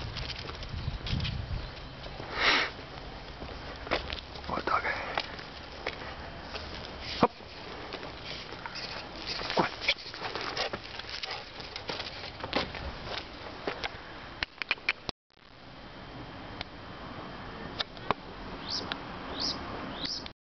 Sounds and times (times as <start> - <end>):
Dog: 9.5 - 12.0.